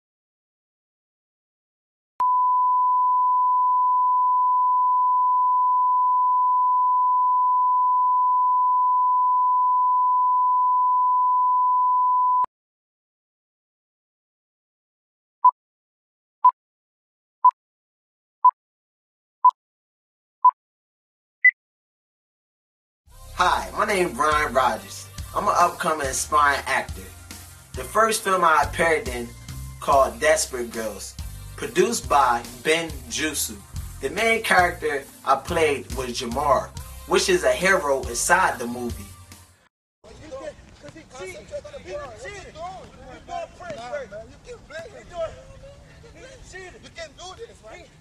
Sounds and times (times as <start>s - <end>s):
Beep, bleep: 2.2s - 12.5s.